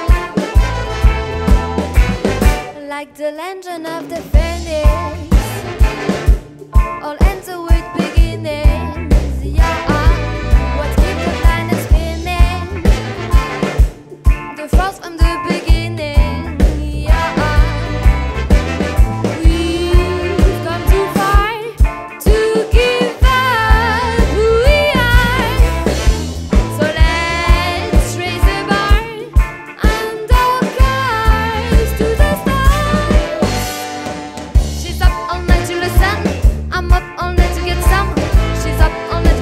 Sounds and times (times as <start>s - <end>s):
Rhythm and blues: 0.0s - 39.4s.